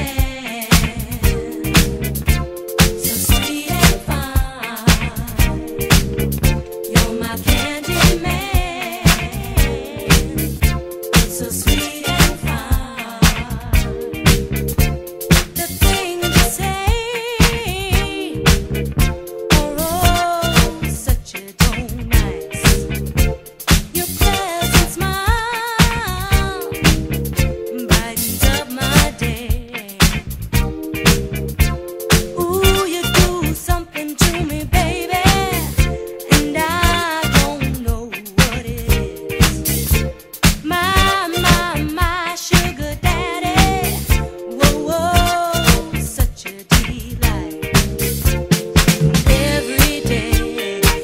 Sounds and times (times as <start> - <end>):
Disco: 0.0 - 51.0
Funk: 0.0 - 51.0.